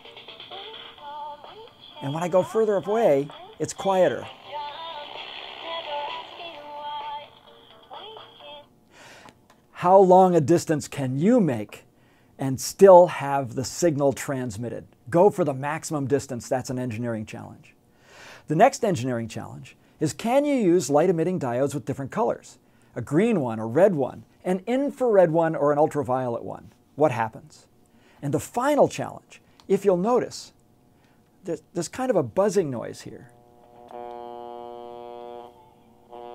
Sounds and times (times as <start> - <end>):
Speech: 2.0 - 4.3, 9.8 - 17.8, 18.5 - 30.6, 31.4 - 33.3.